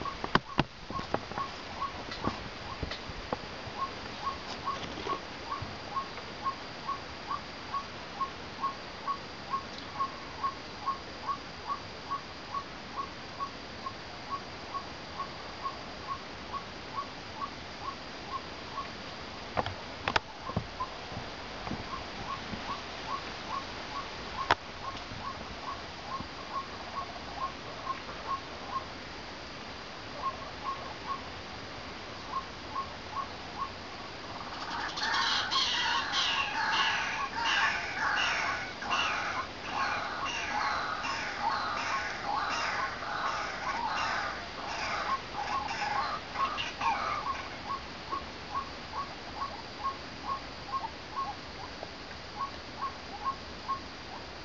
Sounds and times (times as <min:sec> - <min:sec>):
Bird: 0:00.0 - 0:03.0, 0:03.8 - 0:19.0, 0:21.9 - 0:28.9, 0:30.2 - 0:31.3, 0:32.2 - 0:51.8.